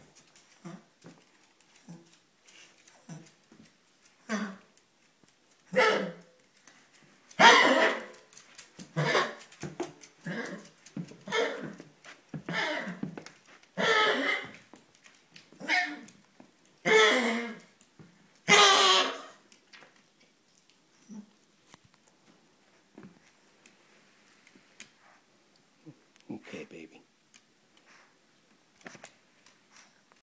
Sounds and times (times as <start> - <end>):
Speech: 26.2 - 27.1.